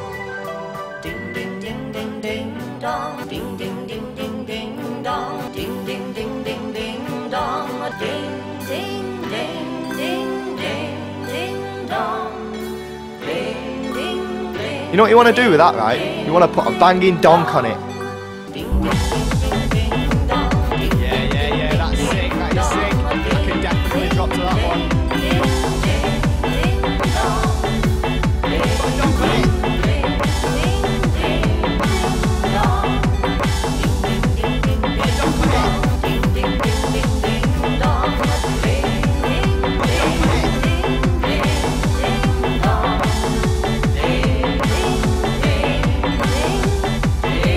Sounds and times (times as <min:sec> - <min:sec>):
Music: 0:00.0 - 0:47.5.